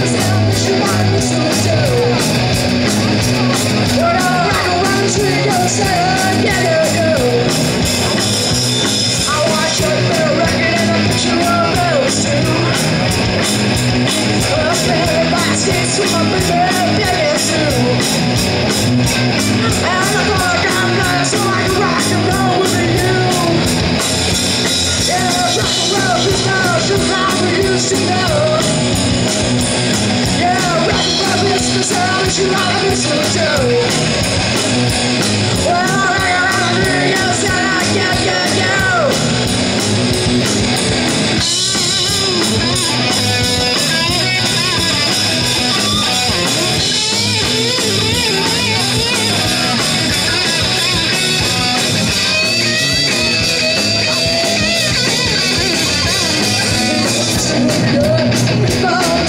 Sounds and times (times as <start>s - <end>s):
Rock and roll: 0.0s - 59.2s.